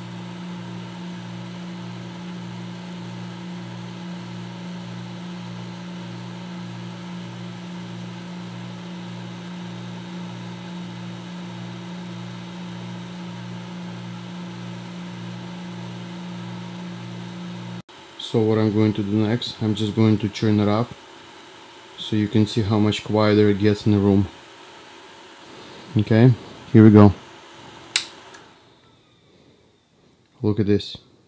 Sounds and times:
White noise: 0.0 - 31.2
Speech: 18.2 - 21.0, 22.0 - 24.4, 25.9 - 27.2, 30.4 - 31.1.

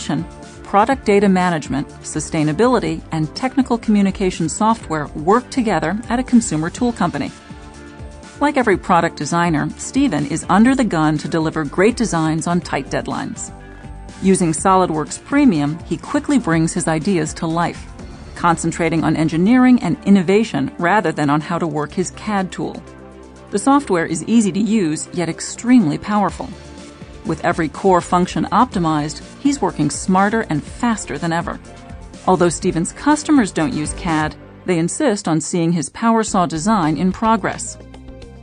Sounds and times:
Speech: 0.0 - 7.4, 8.4 - 13.5, 14.2 - 22.8, 23.6 - 26.6, 27.3 - 31.6, 32.3 - 37.8
Music: 0.0 - 38.4.

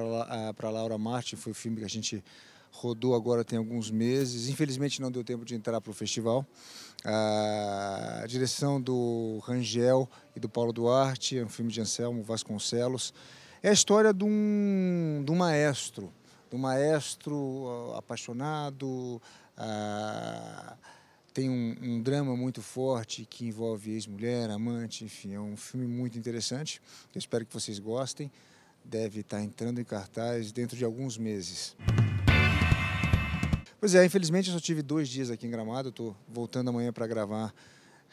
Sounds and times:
Speech: 0.0 - 20.8, 21.4 - 28.3, 28.9 - 31.8, 33.8 - 37.6.

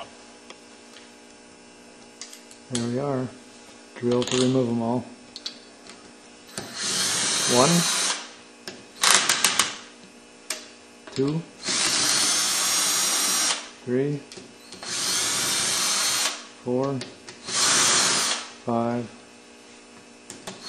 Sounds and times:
Speech: 2.7 - 3.4, 4.0 - 5.1, 13.8 - 14.3, 16.6 - 17.1, 18.7 - 19.2.

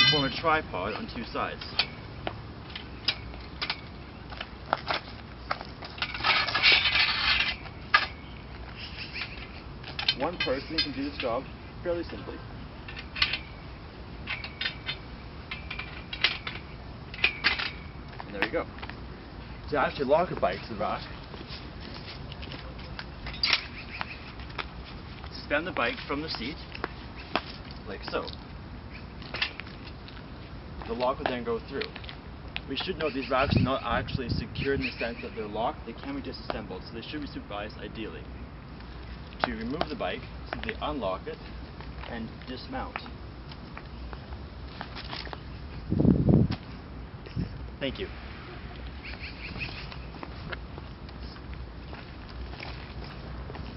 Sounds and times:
Speech: 0.0 - 1.8, 10.2 - 12.4, 18.3 - 18.7, 19.7 - 21.2, 25.3 - 26.6, 27.9 - 28.4, 30.8 - 32.0, 32.7 - 38.3, 39.4 - 41.4, 42.0 - 43.1, 47.8 - 48.1.

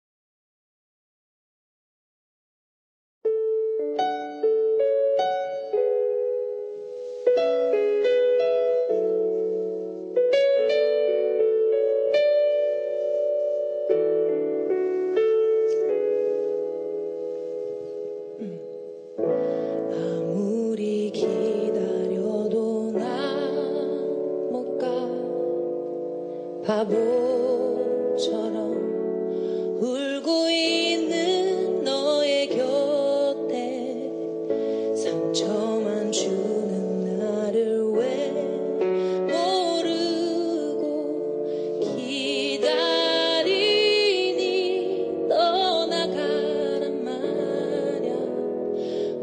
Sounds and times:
Music: 3.2 - 49.2.

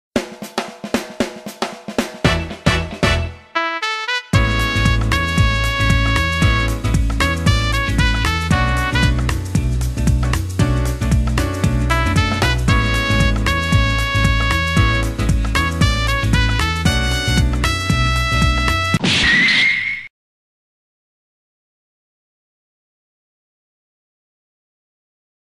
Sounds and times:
Drum roll: 0.2 - 3.4, 4.4 - 19.0.

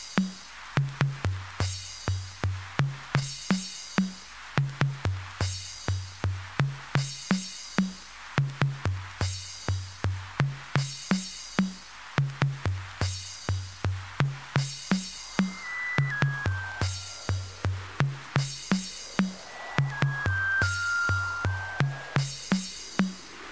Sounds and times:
Techno: 14.3 - 23.5.

